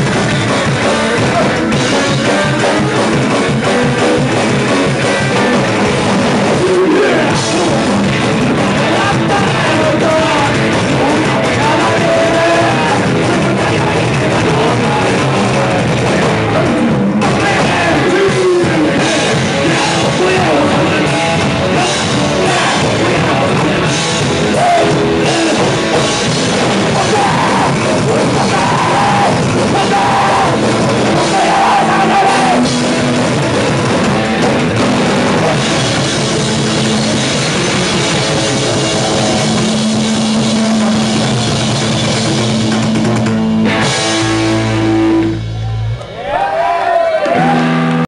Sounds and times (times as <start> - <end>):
Bass drum: 0.0 - 45.8
Drum kit: 0.0 - 48.0.